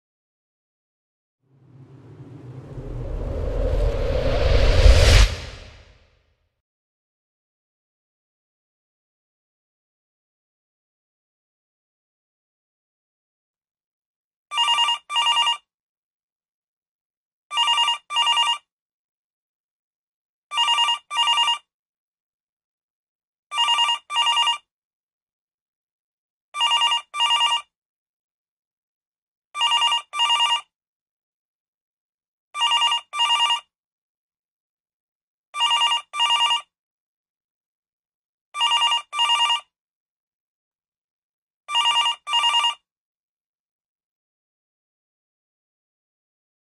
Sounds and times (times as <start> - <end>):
Telephone bell ringing: 20.6 - 21.6, 23.6 - 24.6, 29.6 - 30.6, 32.6 - 33.6, 35.6 - 36.6, 38.6 - 39.6, 41.8 - 42.8.